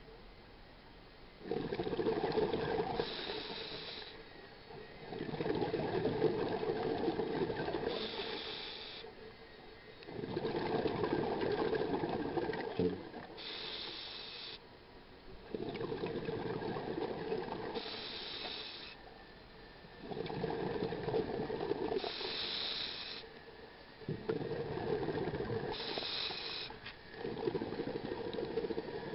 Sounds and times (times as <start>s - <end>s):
Boat, Water vehicle: 0.0s - 29.1s.